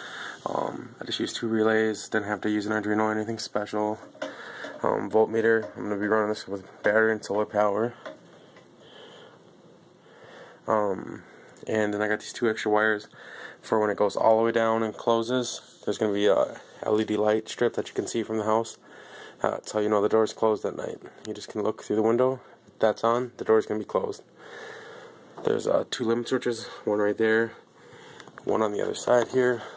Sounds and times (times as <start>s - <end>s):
Speech: 0.4s - 4.2s, 4.8s - 8.1s, 10.7s - 18.8s, 19.4s - 24.3s, 25.4s - 27.7s, 28.4s - 29.7s.